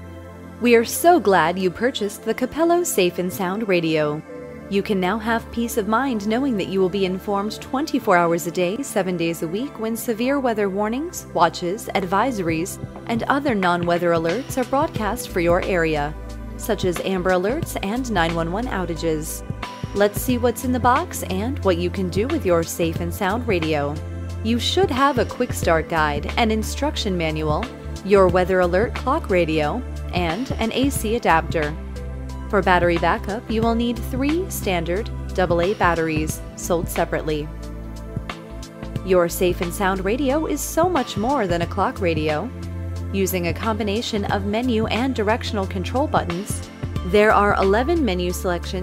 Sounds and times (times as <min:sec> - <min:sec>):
Music: 0:00.0 - 0:48.8
Speech: 0:00.6 - 0:19.4, 0:20.0 - 0:31.8, 0:32.5 - 0:37.5, 0:39.0 - 0:42.5, 0:43.1 - 0:48.8.